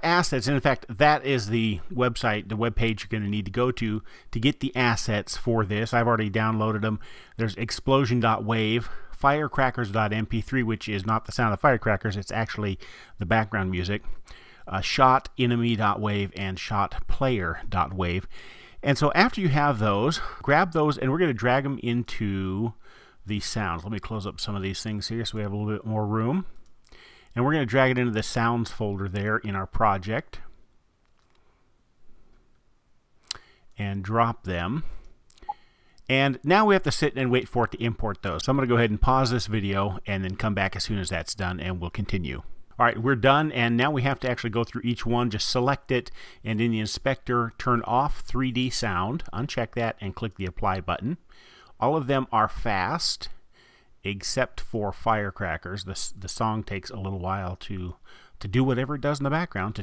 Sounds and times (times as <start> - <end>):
Speech: 0.0 - 14.1, 14.7 - 26.6, 27.4 - 30.6, 33.8 - 35.0, 36.1 - 51.2, 51.8 - 53.4, 54.0 - 59.8.